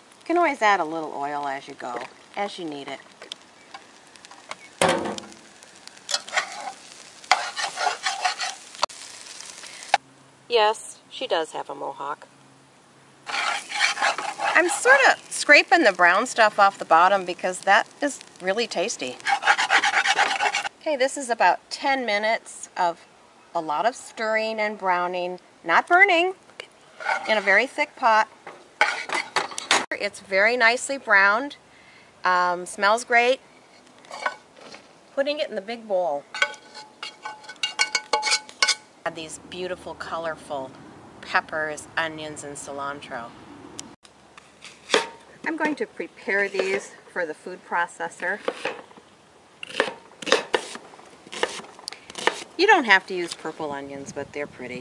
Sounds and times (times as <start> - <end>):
Sizzle: 0.0 - 10.0, 13.2 - 22.9, 23.8 - 31.6, 32.2 - 40.2
Stir: 6.1 - 8.6, 13.3 - 14.9, 19.2 - 20.7.